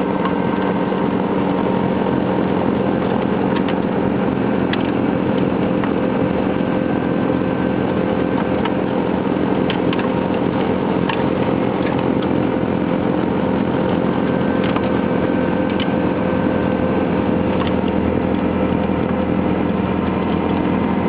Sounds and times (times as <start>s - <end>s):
Vehicle: 0.0s - 21.0s.